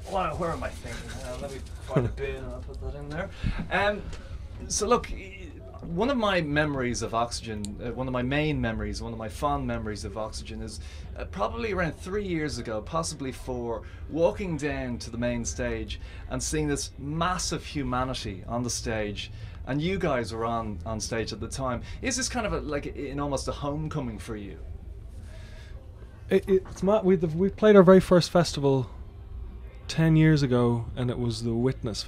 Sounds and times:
Speech: 0.0 - 24.7, 26.3 - 29.0, 29.7 - 32.0.

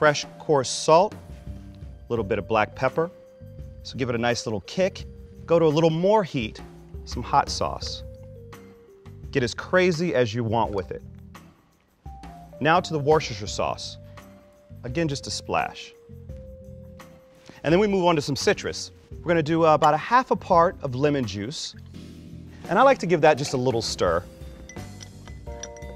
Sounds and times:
Speech: 0.0 - 1.2, 2.1 - 3.2, 3.8 - 8.0, 9.3 - 11.0, 12.6 - 14.0, 14.8 - 16.0, 17.6 - 21.8, 22.7 - 24.3
Music: 0.0 - 25.9.

